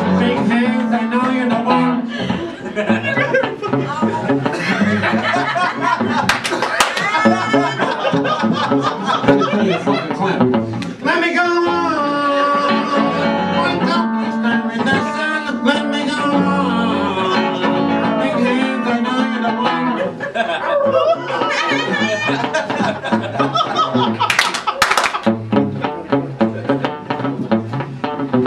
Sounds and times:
Male singing: 0:00.0 - 0:02.2, 0:11.1 - 0:19.8
Music: 0:00.0 - 0:28.4.

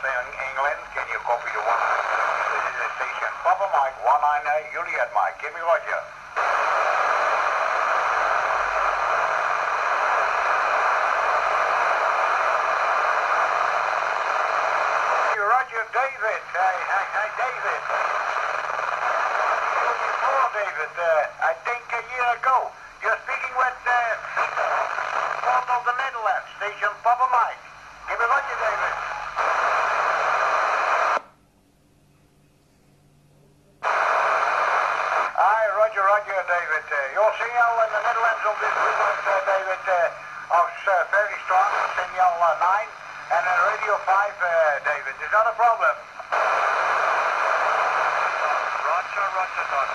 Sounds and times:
Speech: 0:00.0 - 0:06.1, 0:15.4 - 0:18.1, 0:19.8 - 0:29.0, 0:35.4 - 0:46.0, 0:48.4 - 0:49.9
Radio: 0:00.0 - 0:31.2, 0:33.8 - 0:49.9.

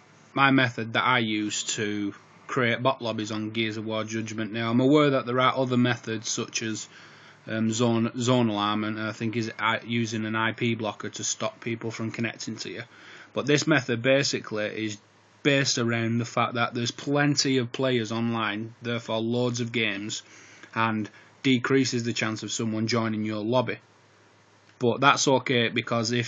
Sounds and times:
Speech: 0:00.4 - 0:06.9, 0:07.5 - 0:23.8, 0:24.8 - 0:26.2.

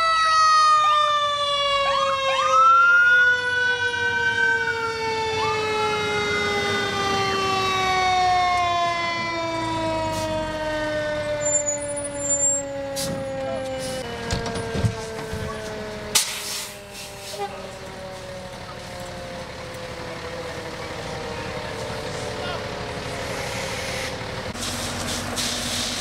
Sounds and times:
Fire engine, fire truck (siren): 0:00.0 - 0:26.0
Truck: 0:00.0 - 0:26.0.

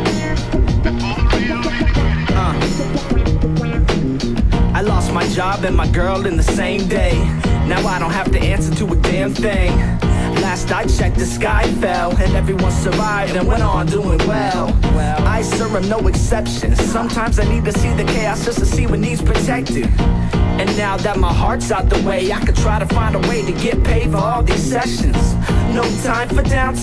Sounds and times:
Music: 0:00.0 - 0:26.8.

